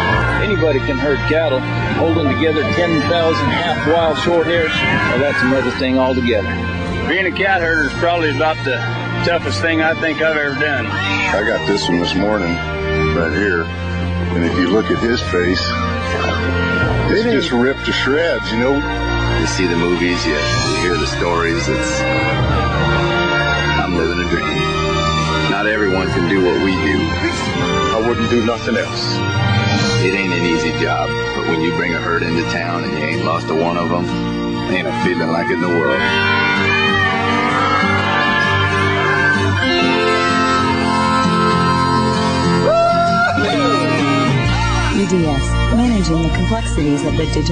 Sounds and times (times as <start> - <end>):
Music: 0.0 - 47.5.